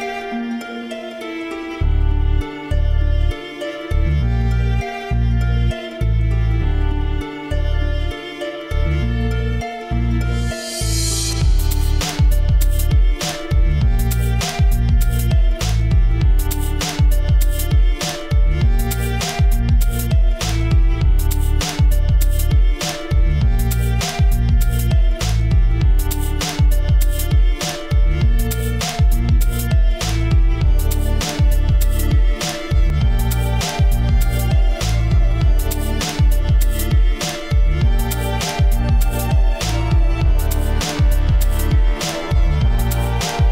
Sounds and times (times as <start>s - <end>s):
Violin, fiddle: 0.0s - 43.5s.